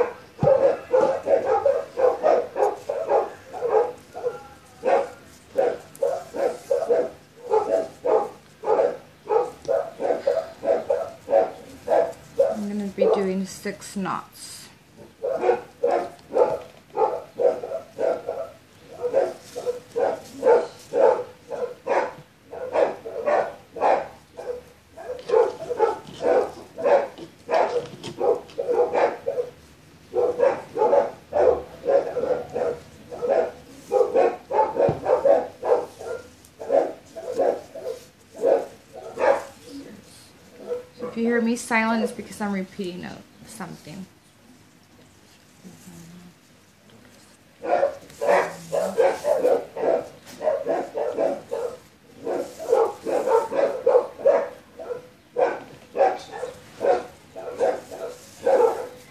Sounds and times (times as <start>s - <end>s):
Bow-wow: 0.0s - 13.2s, 15.2s - 39.7s, 40.5s - 41.2s, 47.6s - 59.1s
Bark: 0.0s - 13.4s, 15.0s - 39.8s, 40.5s - 42.3s, 47.6s - 59.1s.